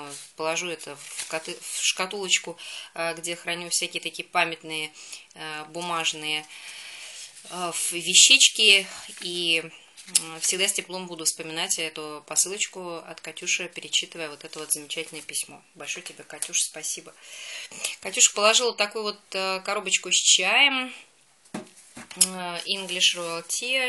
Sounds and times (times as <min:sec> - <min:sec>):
Speech: 0:00.0 - 0:06.5, 0:07.5 - 0:17.2, 0:17.8 - 0:21.1, 0:22.1 - 0:23.8.